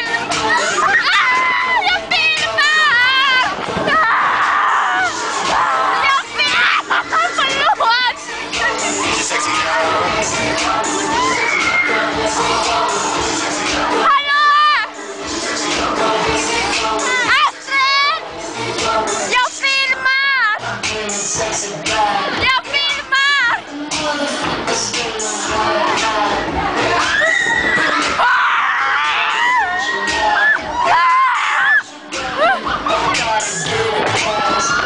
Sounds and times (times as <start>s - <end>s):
Music: 0.0s - 34.8s.